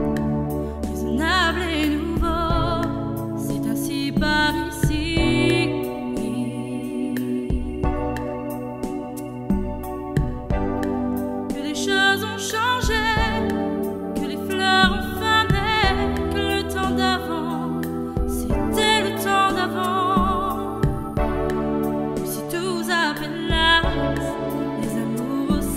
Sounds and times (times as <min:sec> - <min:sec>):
Music: 0:00.0 - 0:25.7.